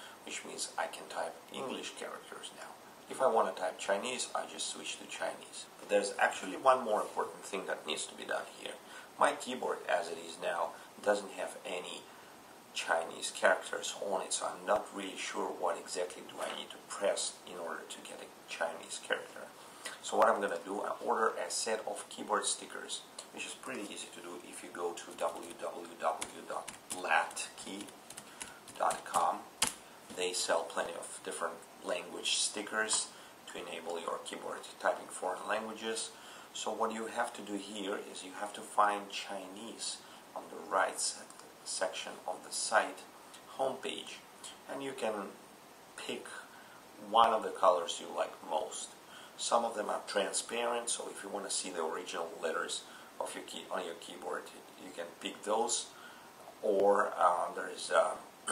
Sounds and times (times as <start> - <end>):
Speech: 0.0 - 12.1, 12.7 - 28.0, 28.7 - 45.4, 46.0 - 58.5
Inside, small room: 0.0 - 58.5.